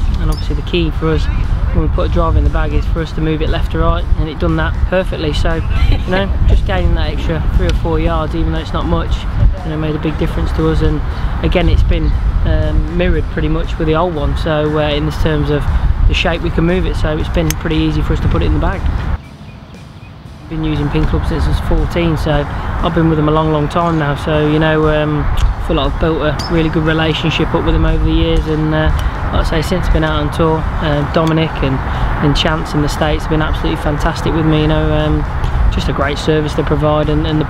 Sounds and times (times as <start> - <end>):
Speech: 0.1 - 18.9, 20.5 - 37.4.